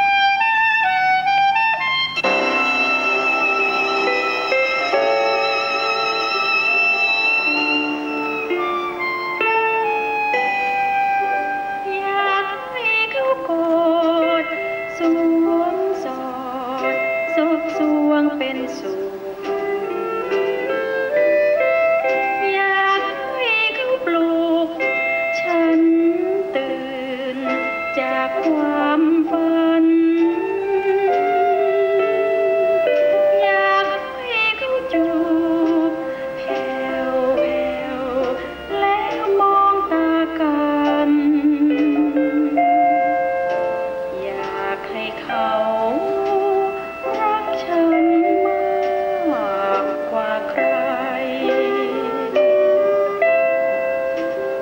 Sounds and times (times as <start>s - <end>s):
Sad music: 0.0s - 54.6s.